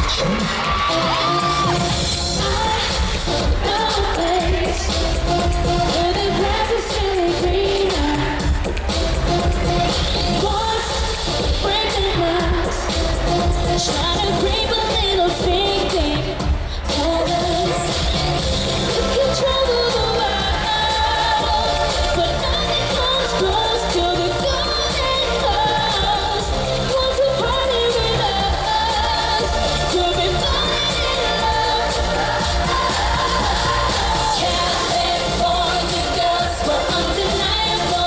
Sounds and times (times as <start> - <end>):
Music: 0.0 - 38.0.